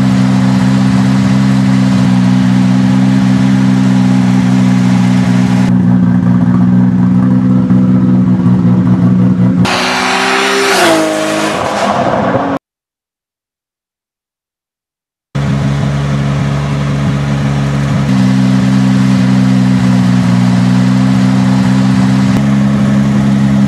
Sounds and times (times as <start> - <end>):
Car: 0.0 - 12.6, 15.4 - 23.6
Medium engine (mid frequency): 0.0 - 12.6, 15.4 - 23.6.